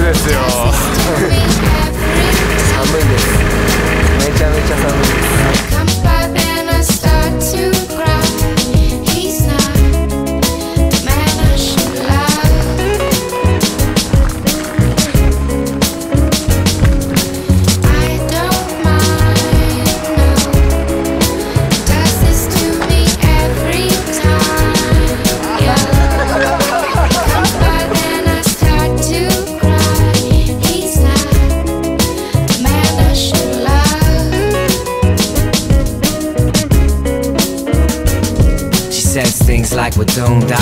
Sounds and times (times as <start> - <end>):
Music: 0.0 - 40.6.